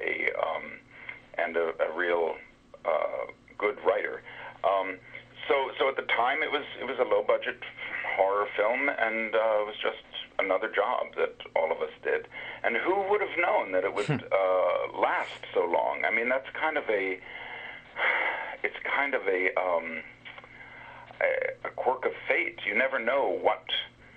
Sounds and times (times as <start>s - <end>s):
Radio: 0.0s - 17.3s, 18.0s - 20.5s, 21.1s - 24.0s.